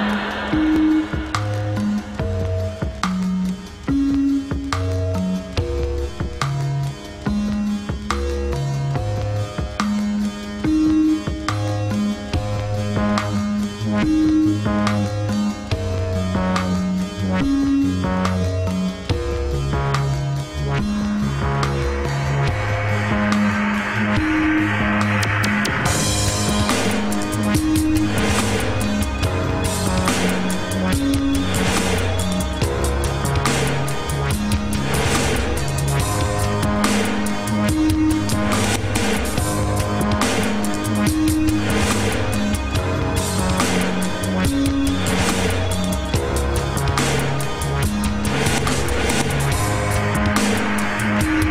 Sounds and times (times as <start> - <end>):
Music: 0.0 - 51.5.